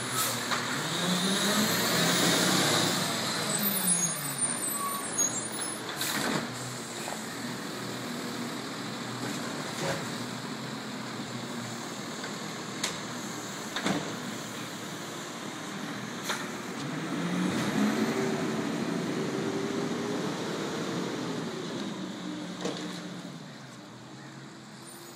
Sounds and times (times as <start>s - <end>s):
Truck: 0.0s - 25.1s.